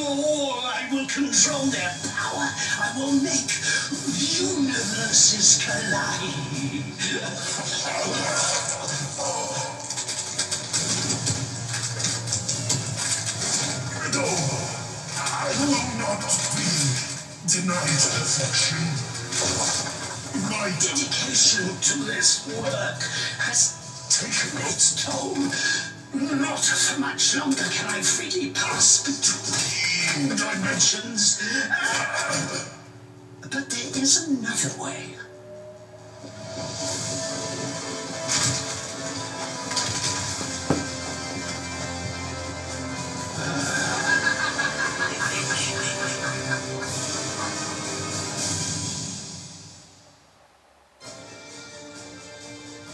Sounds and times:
Television: 0:00.0 - 0:52.9.

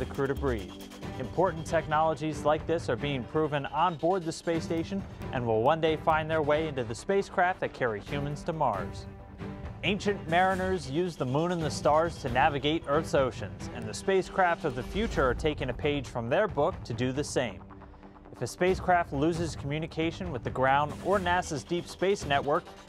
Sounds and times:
Speech: 0:00.0 - 0:09.1, 0:09.8 - 0:17.6, 0:18.4 - 0:22.6
Music: 0:00.0 - 0:22.8.

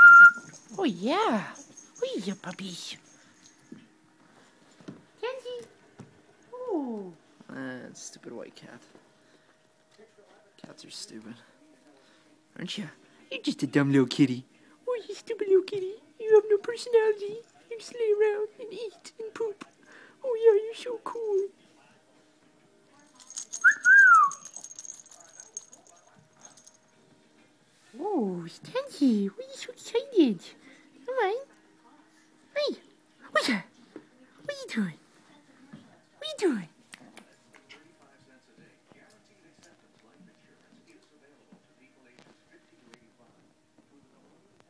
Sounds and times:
Speech: 0:00.7 - 0:03.0, 0:09.9 - 0:23.3.

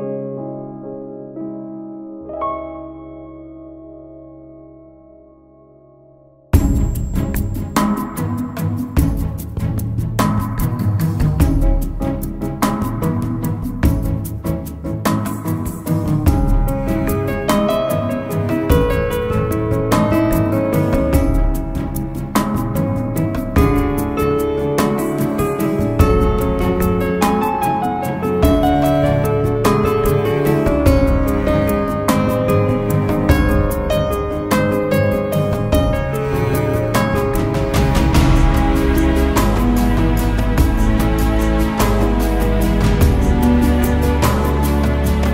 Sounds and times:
Music: 0:00.0 - 0:45.3.

